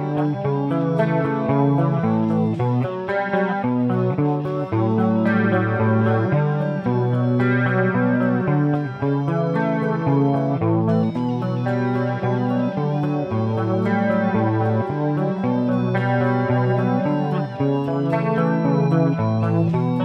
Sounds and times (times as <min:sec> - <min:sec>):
Electric guitar: 0:00.0 - 0:20.0.